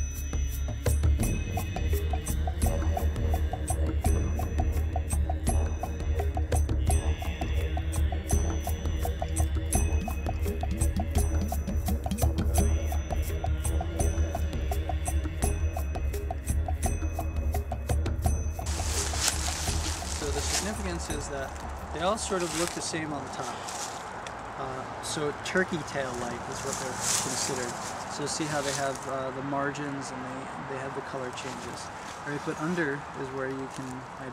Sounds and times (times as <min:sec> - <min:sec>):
Music: 0:00.0 - 0:22.8.